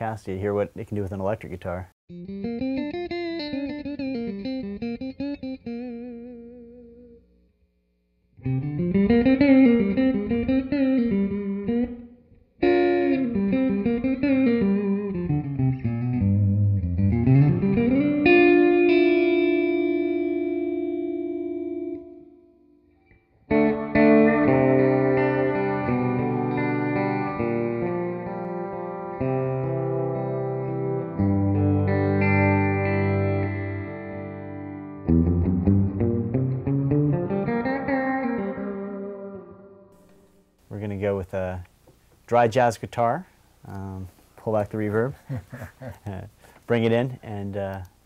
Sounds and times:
Electric guitar: 0:02.1 - 0:07.3, 0:08.4 - 0:40.4.

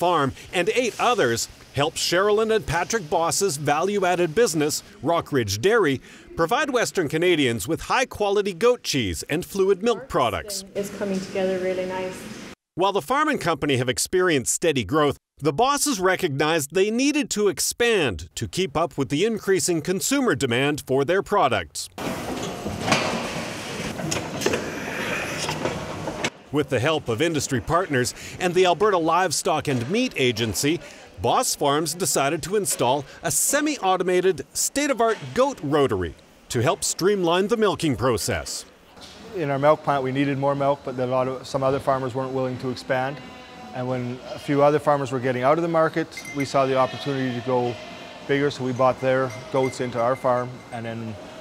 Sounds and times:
Speech: 0:12.8 - 0:21.9, 0:26.6 - 0:43.2, 0:43.8 - 0:51.2.

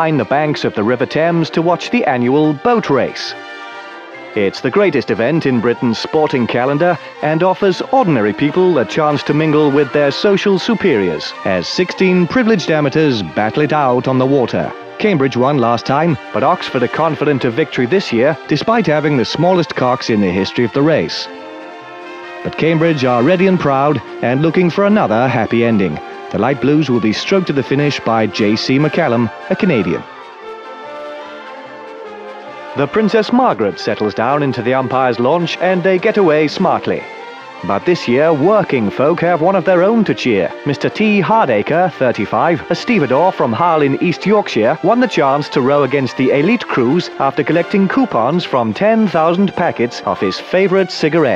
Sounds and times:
Speech: 0:00.0 - 0:03.4, 0:04.4 - 0:21.3, 0:22.5 - 0:30.1, 0:32.8 - 0:51.3
Music: 0:00.0 - 0:51.3.

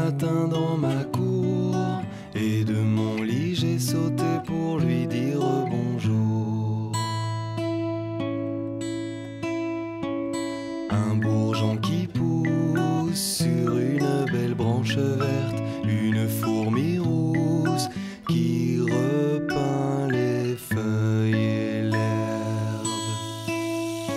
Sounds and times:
Music: 0:00.0 - 0:24.1.

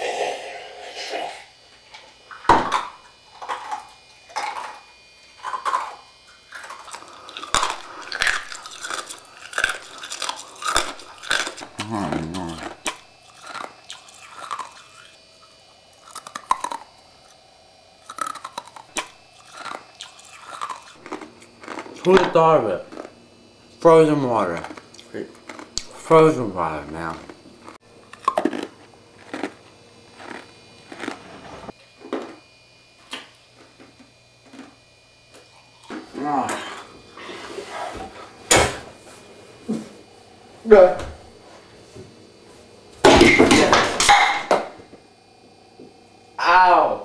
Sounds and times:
Chewing, mastication: 0:03.4 - 0:17.4, 0:18.0 - 0:22.3, 0:22.9 - 0:23.2, 0:24.6 - 0:26.0, 0:26.8 - 0:31.7.

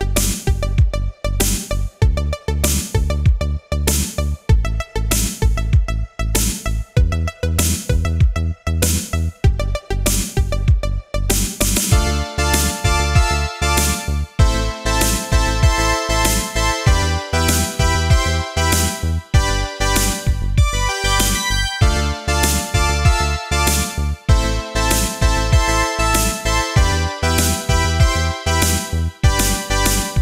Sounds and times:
Music: 0:00.0 - 0:30.2.

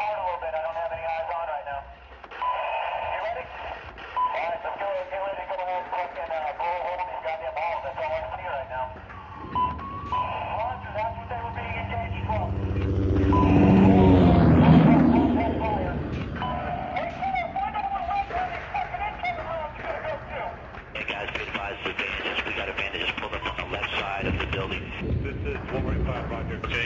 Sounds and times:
Speech: 0:00.0 - 0:01.9, 0:02.6 - 0:09.0, 0:10.2 - 0:12.6, 0:13.5 - 0:16.1, 0:17.0 - 0:26.8.

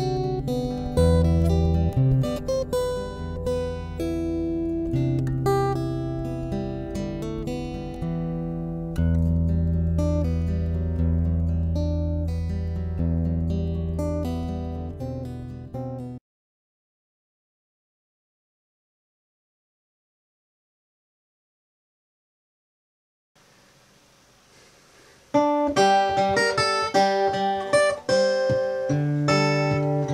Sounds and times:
Acoustic guitar: 0:00.0 - 0:16.2, 0:23.4 - 0:30.1.

